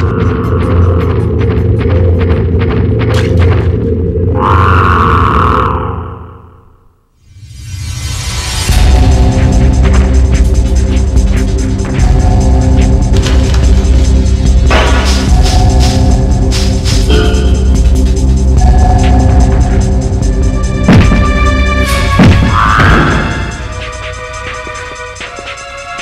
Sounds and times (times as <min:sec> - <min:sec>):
Music: 0:00.0 - 0:04.9, 0:07.2 - 0:26.0.